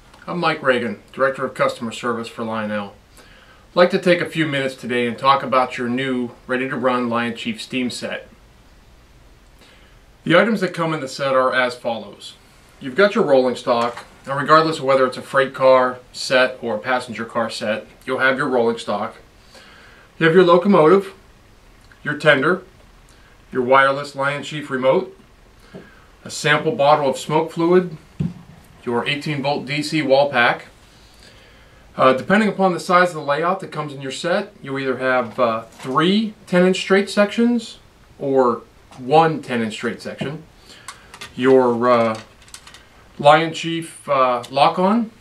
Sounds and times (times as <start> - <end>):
Speech: 0.2 - 3.0, 3.8 - 8.3, 10.2 - 19.2, 20.2 - 21.2, 22.0 - 22.7, 23.5 - 25.2, 26.2 - 28.0, 28.8 - 30.7, 32.0 - 40.5, 41.3 - 42.3, 43.2 - 45.2.